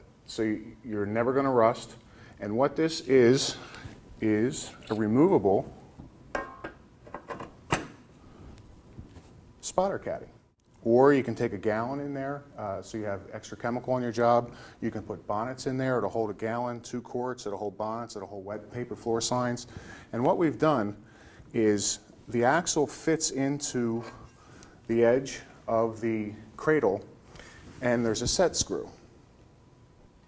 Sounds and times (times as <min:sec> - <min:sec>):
Speech: 0:00.0 - 0:05.8, 0:09.6 - 0:24.3, 0:24.9 - 0:27.1, 0:27.8 - 0:29.1.